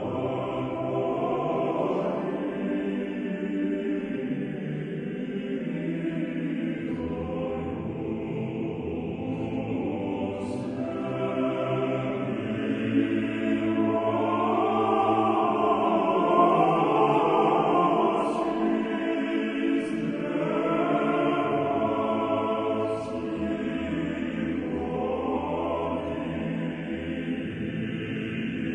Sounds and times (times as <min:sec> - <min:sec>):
Mantra: 0:00.0 - 0:28.7.